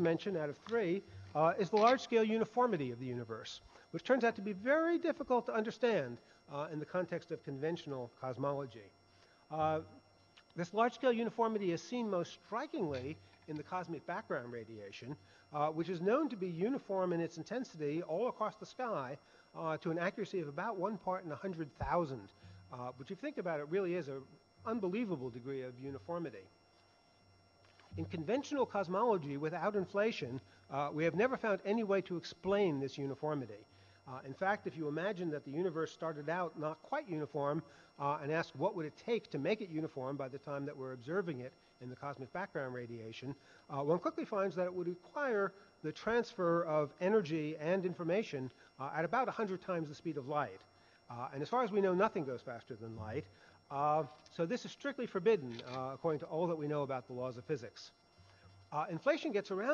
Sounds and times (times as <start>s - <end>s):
Speech: 0.0s - 10.0s, 10.6s - 26.5s, 28.0s - 58.0s, 58.8s - 59.7s.